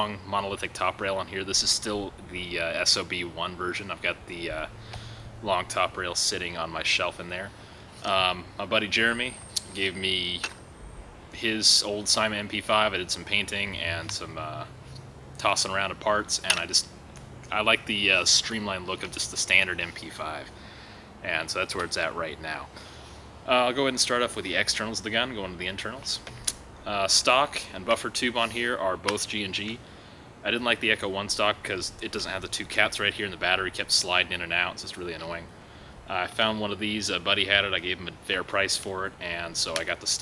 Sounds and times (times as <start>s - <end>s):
Speech: 0.0s - 4.7s, 5.4s - 10.5s, 11.4s - 14.7s, 15.4s - 16.9s, 17.5s - 20.6s, 21.2s - 22.8s, 23.4s - 29.8s, 30.4s - 35.5s, 36.1s - 40.2s.